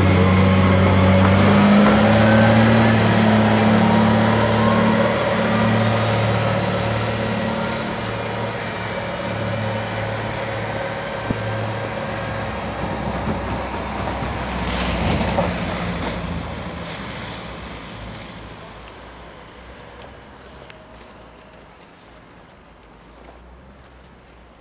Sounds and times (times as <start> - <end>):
Vehicle: 0.0 - 24.6.